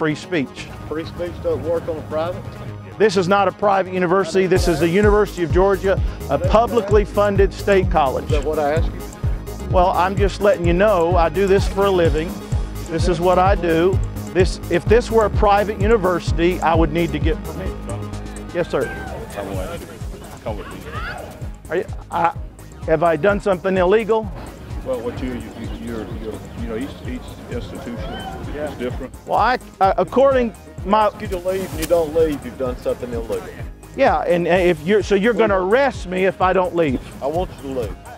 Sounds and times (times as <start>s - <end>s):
Male speech, man speaking: 0.0s - 38.0s
Music: 0.0s - 38.1s.